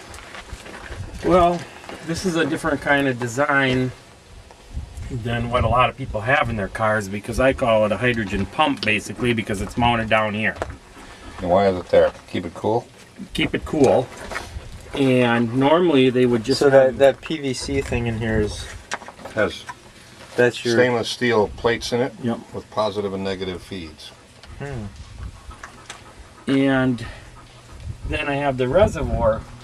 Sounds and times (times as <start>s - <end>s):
Speech: 1.2s - 4.0s, 5.1s - 10.7s, 11.4s - 14.1s, 15.0s - 19.7s, 20.4s - 25.0s, 26.5s - 27.2s, 28.1s - 29.4s.